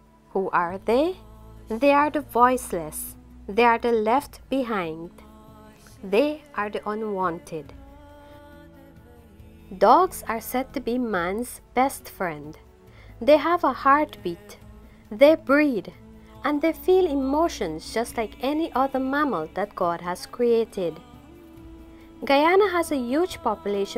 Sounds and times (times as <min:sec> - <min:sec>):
Music: 0:00.0 - 0:23.9
Speech: 0:00.3 - 0:05.1, 0:06.0 - 0:07.8, 0:09.7 - 0:12.6, 0:13.2 - 0:21.0, 0:22.2 - 0:23.9.